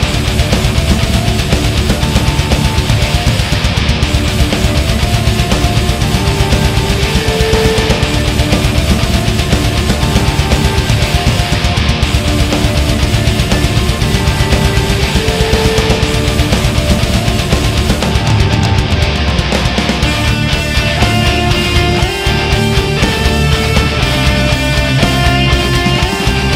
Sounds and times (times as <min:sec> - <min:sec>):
Electric guitar: 0:00.0 - 0:26.5.